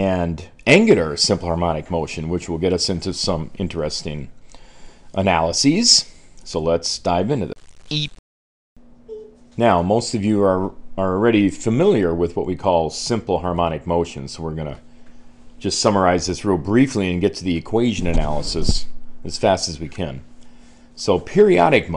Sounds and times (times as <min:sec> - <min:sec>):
Speech: 0:00.0 - 0:04.4, 0:05.2 - 0:08.1, 0:09.1 - 0:14.8, 0:15.6 - 0:20.3, 0:21.0 - 0:21.9.